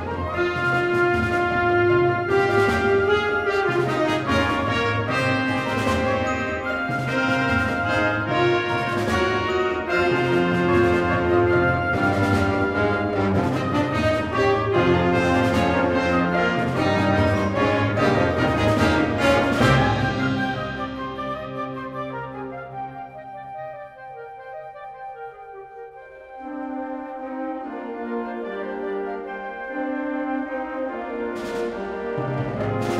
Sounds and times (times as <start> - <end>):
Music: 0.0 - 32.9.